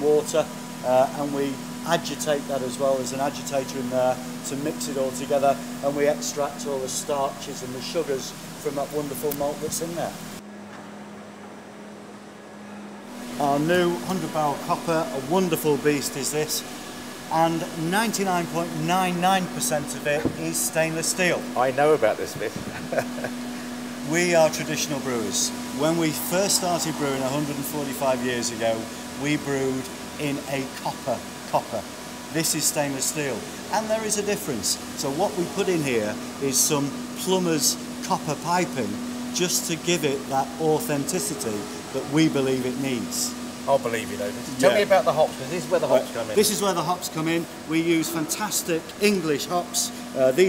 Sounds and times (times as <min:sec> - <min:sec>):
Vacuum cleaner: 0:13.1 - 0:47.3.